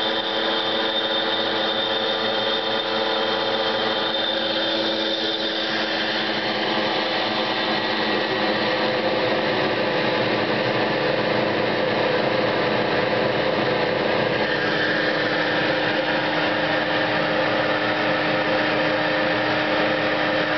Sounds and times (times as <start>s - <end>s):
Engine: 0.0s - 20.5s.